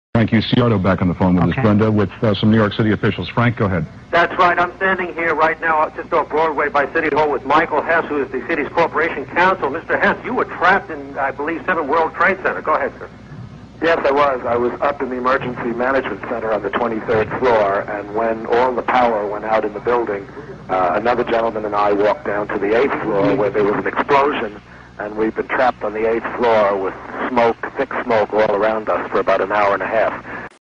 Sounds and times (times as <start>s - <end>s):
Speech: 0.2s - 13.1s, 13.8s - 30.6s.